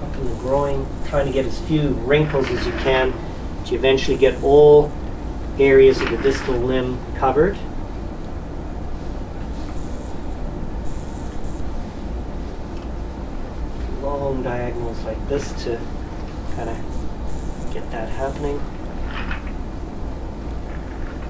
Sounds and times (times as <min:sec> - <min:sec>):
Speech: 0:00.0 - 0:04.9, 0:05.6 - 0:07.7, 0:13.9 - 0:15.9, 0:16.5 - 0:16.8, 0:17.7 - 0:18.7.